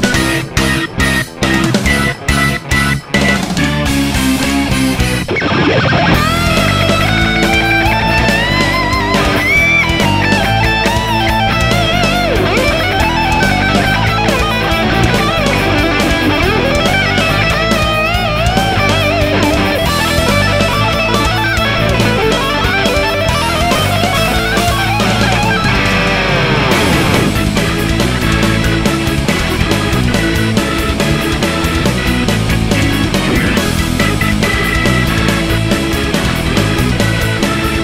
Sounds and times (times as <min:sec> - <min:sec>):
Progressive rock: 0:00.0 - 0:37.8.